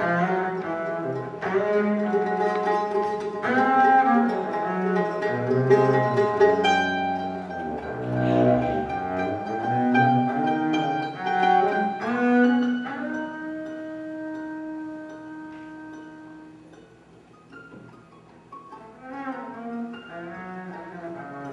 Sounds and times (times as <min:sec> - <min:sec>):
Double bass: 0:00.0 - 0:21.5
String section: 0:00.0 - 0:21.5.